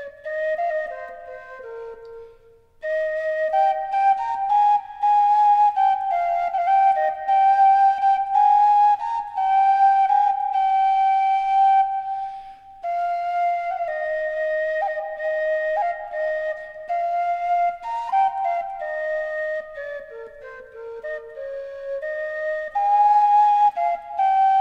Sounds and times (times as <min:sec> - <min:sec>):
Music: 0:00.0 - 0:24.6.